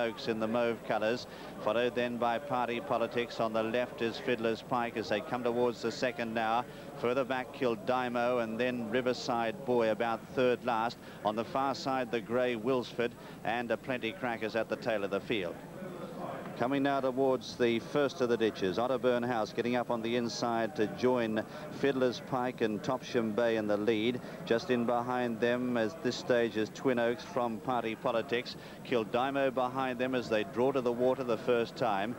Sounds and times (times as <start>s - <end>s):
Speech: 0.0s - 32.1s.